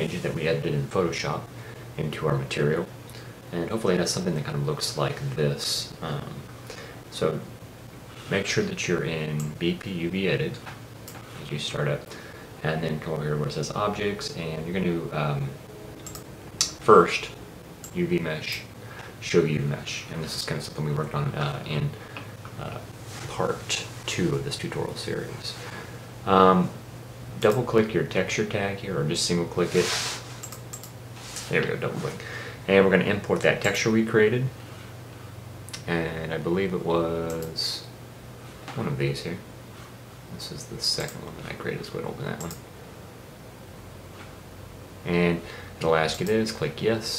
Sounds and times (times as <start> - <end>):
Speech: 0.0 - 2.9, 3.5 - 6.5, 7.1 - 7.5, 8.3 - 10.7, 11.4 - 15.6, 16.6 - 22.0, 22.6 - 26.8, 27.4 - 30.1, 31.5 - 34.6, 35.8 - 37.9, 38.7 - 39.5, 40.3 - 42.6, 45.0 - 47.1.